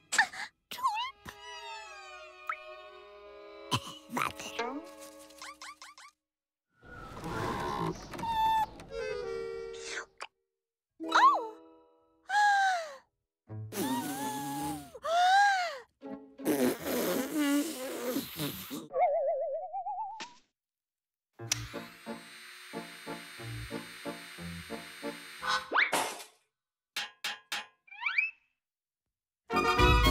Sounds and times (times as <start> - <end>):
Music: 1.0 - 5.5, 6.9 - 10.2, 11.0 - 12.3, 13.5 - 15.0, 15.8 - 17.6, 29.5 - 30.1.